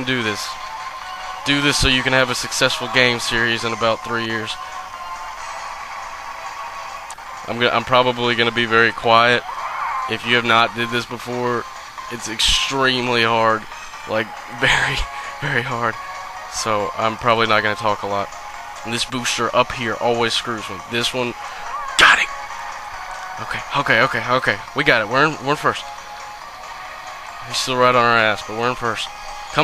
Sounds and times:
Speech: 0:00.0 - 0:00.5, 0:01.5 - 0:04.6, 0:07.5 - 0:09.4, 0:10.1 - 0:21.4, 0:22.0 - 0:22.3, 0:23.4 - 0:25.8, 0:27.4 - 0:29.6
Music: 0:00.0 - 0:29.6.

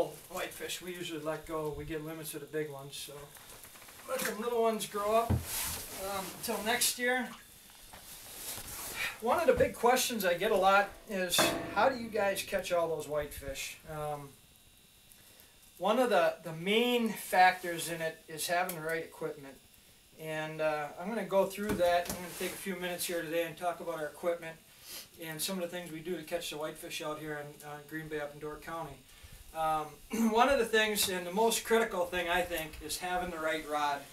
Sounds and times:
Speech: 0:00.0 - 0:03.3, 0:04.0 - 0:05.4, 0:06.0 - 0:07.4, 0:09.2 - 0:14.4, 0:15.8 - 0:19.6, 0:20.2 - 0:24.6, 0:25.2 - 0:29.0, 0:29.6 - 0:34.1.

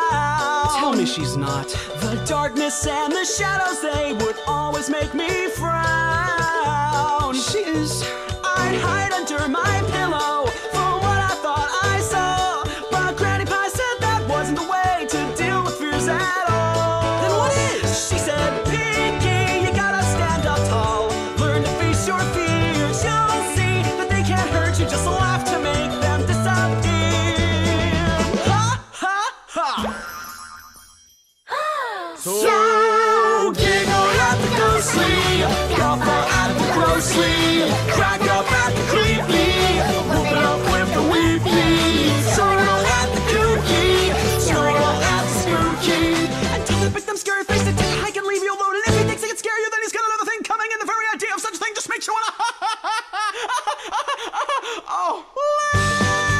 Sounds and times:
Music: 0:00.0 - 0:29.0, 0:33.4 - 0:49.4, 0:55.8 - 0:56.3.

